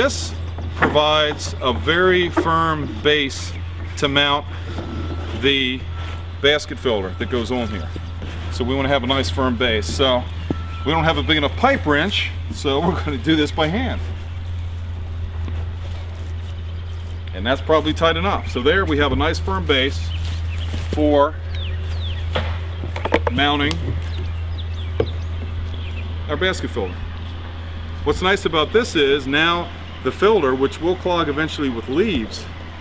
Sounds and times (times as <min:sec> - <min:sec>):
Speech: 0:00.0 - 0:04.5, 0:05.4 - 0:14.1, 0:17.3 - 0:20.2, 0:21.0 - 0:21.4, 0:23.2 - 0:24.0, 0:26.3 - 0:27.0, 0:28.0 - 0:32.5.